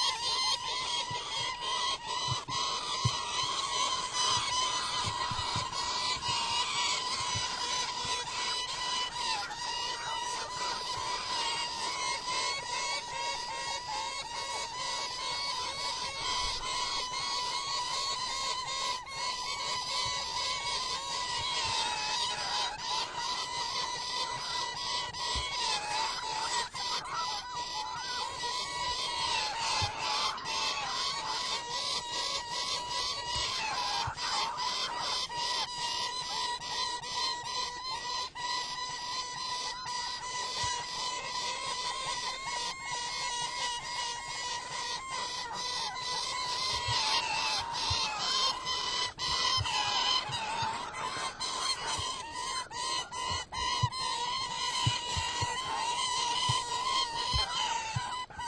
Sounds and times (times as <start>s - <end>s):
Bird vocalization, bird call, bird song: 0.0s - 58.4s.